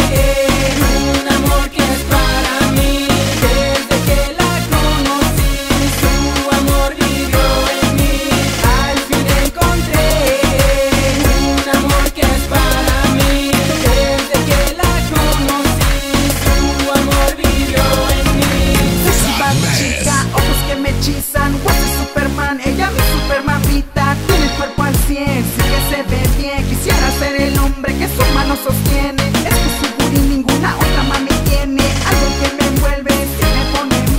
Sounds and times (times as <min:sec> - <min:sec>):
Exciting music: 0:00.0 - 0:23.4, 0:24.2 - 0:34.1
Independent music: 0:00.0 - 0:34.1.